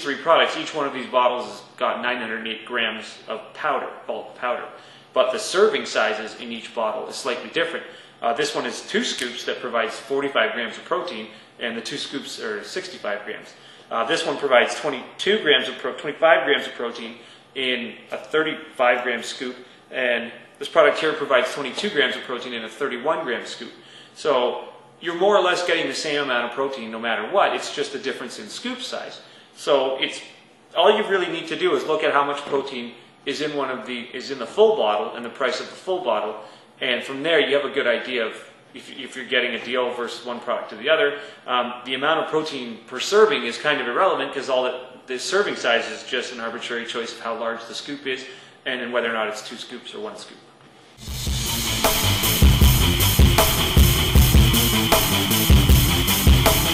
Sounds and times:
Speech: 0.0 - 50.5.

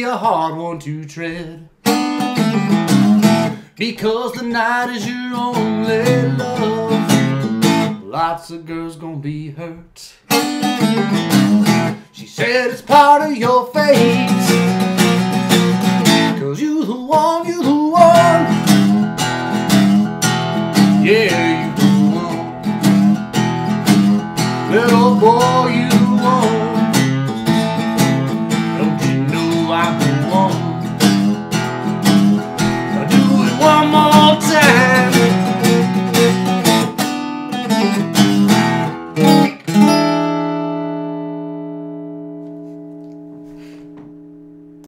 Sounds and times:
Guitar: 0.0 - 44.8
Inside, small room: 0.0 - 44.8.

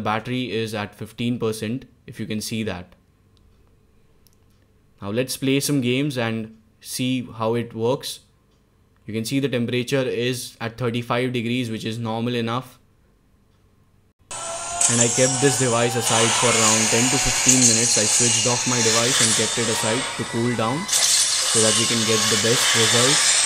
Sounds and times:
Speech: 0.0 - 3.0, 5.0 - 8.3, 9.1 - 12.8, 14.8 - 20.9, 21.5 - 23.3.

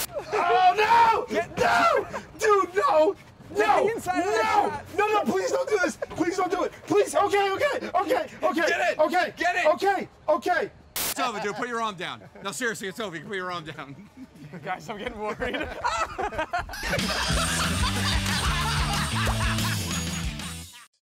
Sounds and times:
Laughter: 5.3 - 6.6, 11.2 - 12.7, 13.8 - 21.0.

